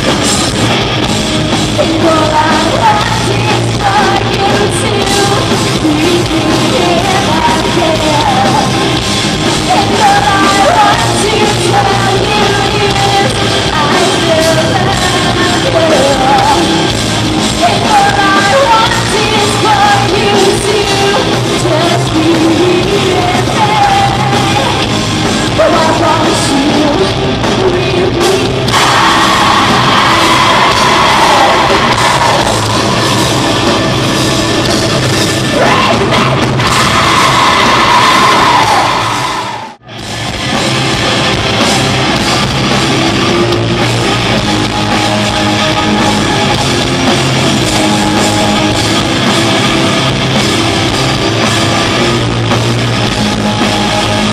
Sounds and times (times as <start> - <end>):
Music: 0.0 - 54.3.